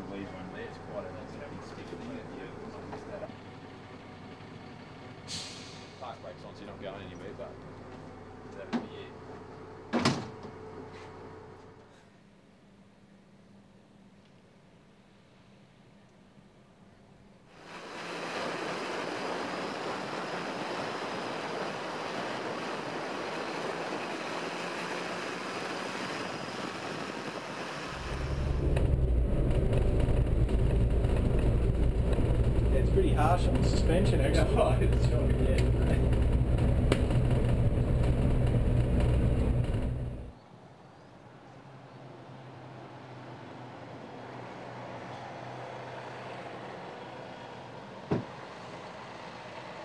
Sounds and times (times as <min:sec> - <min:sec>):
Speech: 0:00.0 - 0:03.3, 0:06.0 - 0:07.6, 0:08.5 - 0:09.2, 0:32.7 - 0:36.0
Bus: 0:00.0 - 0:49.8.